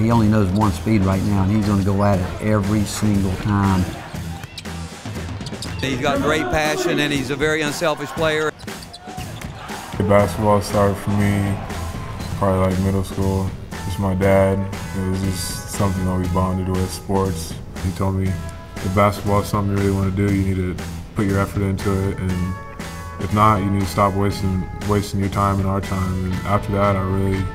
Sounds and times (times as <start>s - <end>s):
Male speech, man speaking: 0.0s - 4.0s, 5.8s - 8.5s, 10.0s - 11.6s, 12.3s - 22.6s, 23.2s - 27.5s
Music: 0.0s - 27.5s.